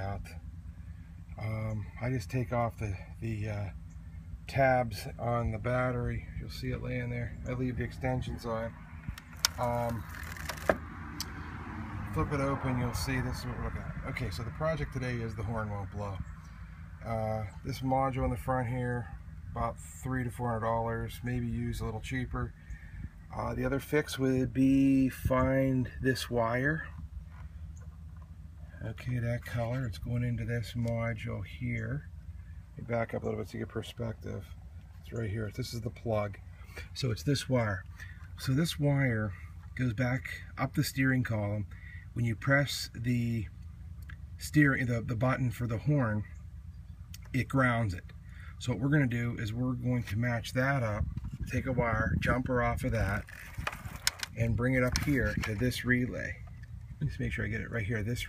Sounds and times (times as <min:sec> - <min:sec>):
Speech: 0:00.0 - 0:00.4, 0:01.4 - 0:03.8, 0:04.5 - 0:08.8, 0:09.5 - 0:10.1, 0:12.0 - 0:16.3, 0:17.0 - 0:22.6, 0:23.3 - 0:27.0, 0:28.7 - 0:32.1, 0:32.8 - 0:43.6, 0:44.4 - 0:46.4, 0:47.2 - 0:53.3, 0:54.2 - 0:58.2.